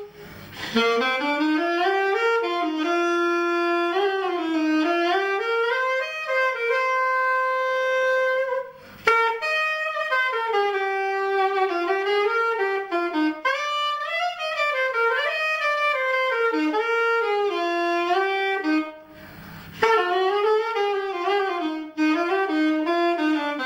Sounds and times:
Jazz: 0.0 - 23.6
Saxophone: 0.0 - 23.6.

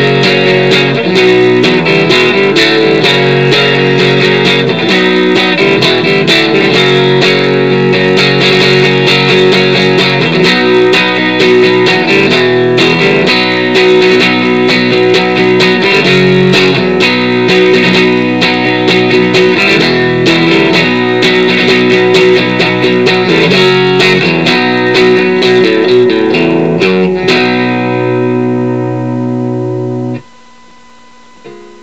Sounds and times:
Strum: 0.0 - 31.8.

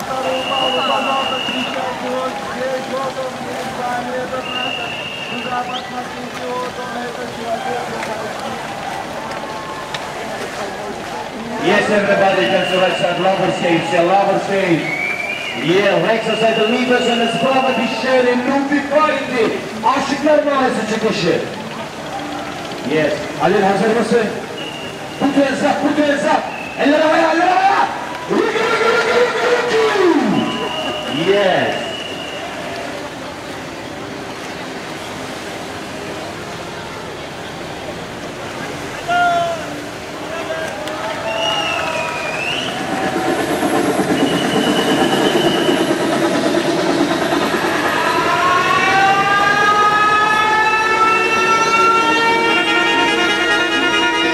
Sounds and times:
Speech: 0.0 - 9.0, 10.2 - 14.9, 15.6 - 21.9, 25.2 - 31.9
Sailboat, sailing ship: 0.0 - 54.3.

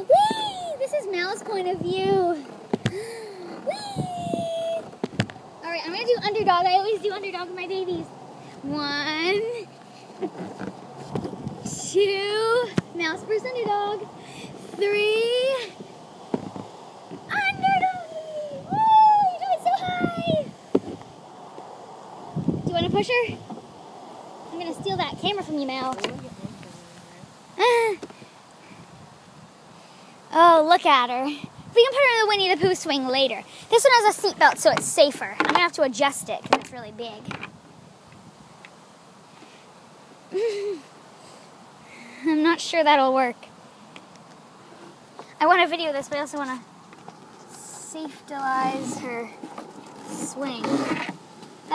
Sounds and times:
Child speech, kid speaking: 0.0 - 2.6, 3.5 - 5.0, 5.6 - 9.7, 11.6 - 15.8, 17.3 - 20.5, 22.6 - 23.4, 24.5 - 28.0, 30.3 - 37.4, 42.2 - 43.5, 45.3 - 46.7, 47.5 - 49.4, 50.0 - 51.0
Outside, urban or manmade: 0.0 - 51.7.

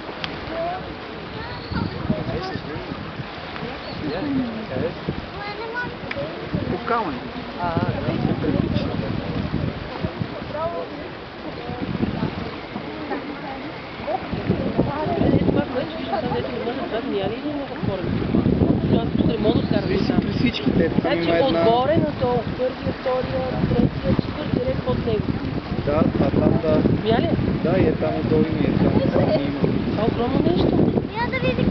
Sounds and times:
Outside, rural or natural: 0.0 - 31.7.

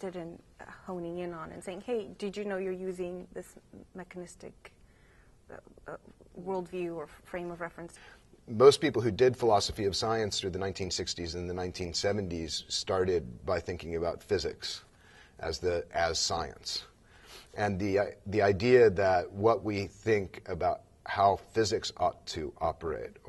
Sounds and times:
Speech: 5.9 - 14.8, 15.4 - 16.9, 17.6 - 23.2.

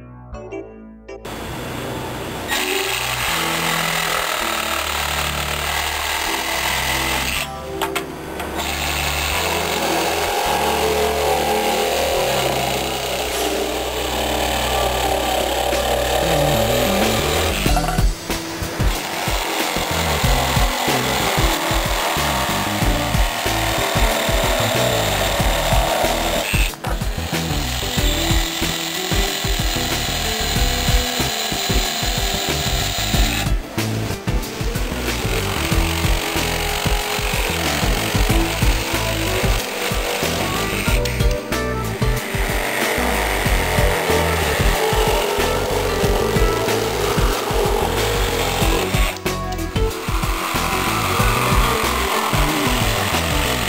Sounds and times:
Music: 0.0 - 53.6.

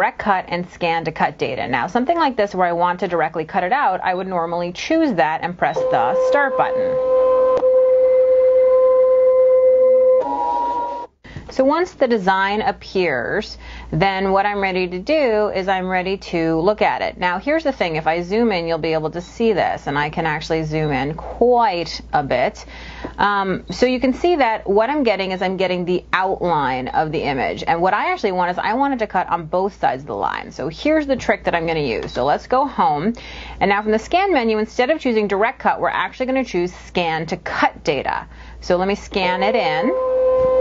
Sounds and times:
Speech: 0.0 - 7.0, 11.5 - 40.0.

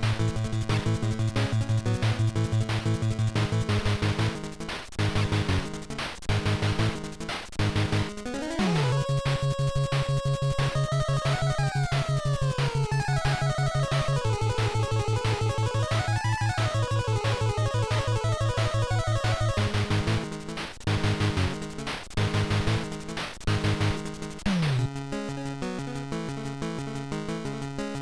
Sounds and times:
Music: 0.0 - 28.0.

